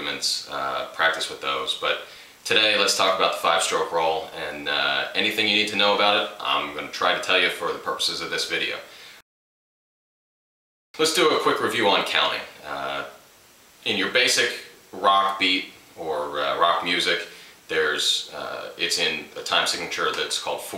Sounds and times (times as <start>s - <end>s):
Speech: 0.0s - 8.9s, 11.0s - 13.2s, 13.8s - 20.7s.